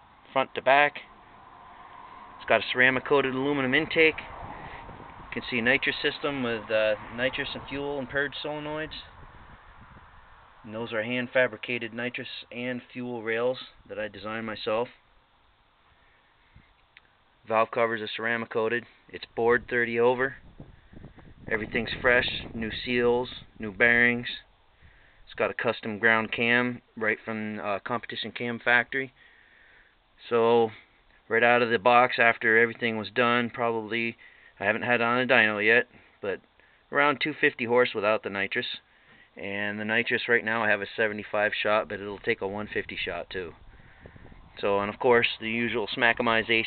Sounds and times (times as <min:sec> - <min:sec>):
Speech: 0:00.3 - 0:01.1, 0:02.4 - 0:04.3, 0:05.3 - 0:09.2, 0:10.7 - 0:15.0, 0:17.5 - 0:20.4, 0:21.5 - 0:24.5, 0:25.3 - 0:29.2, 0:30.2 - 0:38.8, 0:39.4 - 0:43.6, 0:44.6 - 0:46.6.